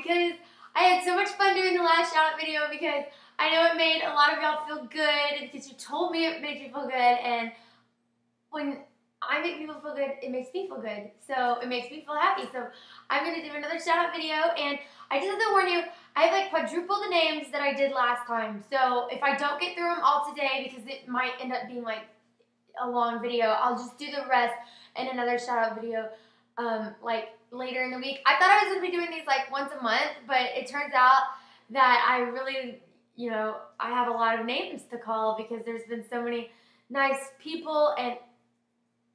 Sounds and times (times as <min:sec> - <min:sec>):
Speech: 0:00.0 - 0:07.6, 0:08.6 - 0:22.0, 0:22.8 - 0:38.2.